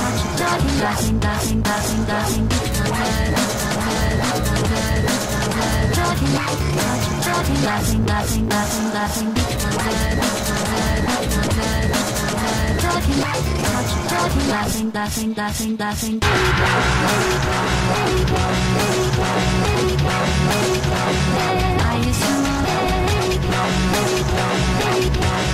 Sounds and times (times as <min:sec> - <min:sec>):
Dubstep: 0:00.0 - 0:25.5.